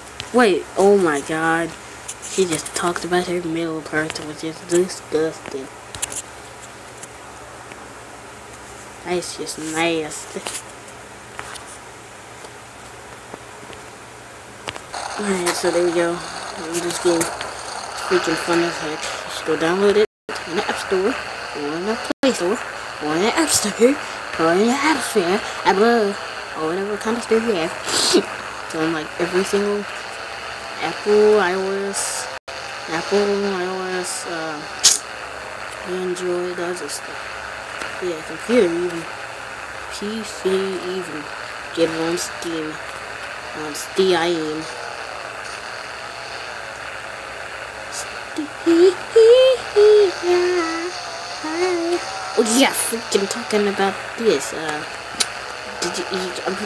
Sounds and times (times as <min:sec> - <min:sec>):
Speech: 0:00.3 - 0:05.7, 0:09.0 - 0:10.6, 0:15.2 - 0:17.4, 0:18.0 - 0:30.0, 0:30.8 - 0:32.3, 0:32.9 - 0:35.0, 0:35.8 - 0:37.2, 0:38.0 - 0:39.1, 0:39.9 - 0:42.8, 0:43.6 - 0:44.8, 0:47.9 - 0:54.9, 0:55.8 - 0:56.6.